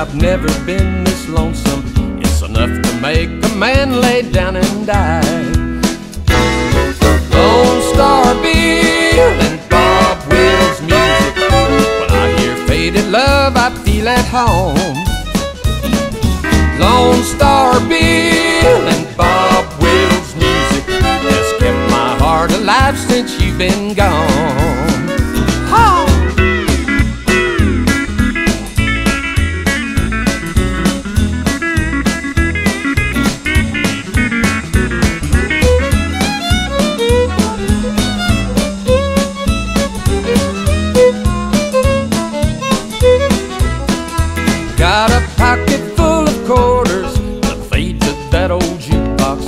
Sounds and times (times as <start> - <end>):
Music: 0.0 - 49.4.